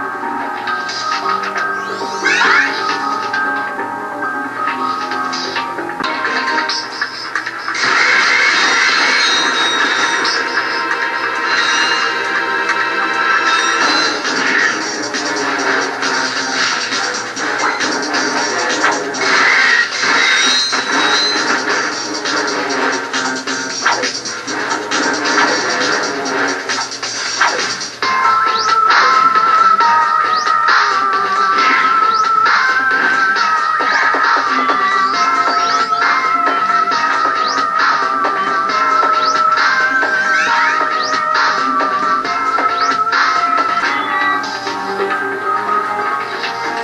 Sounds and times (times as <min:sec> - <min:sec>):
Music: 0:00.0 - 0:46.8.